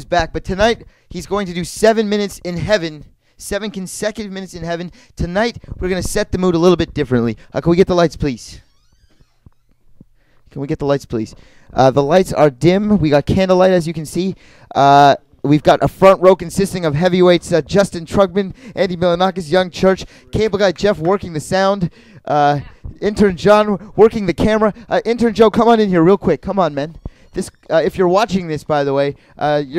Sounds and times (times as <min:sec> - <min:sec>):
Speech: 0:00.0 - 0:08.7, 0:10.5 - 0:29.7.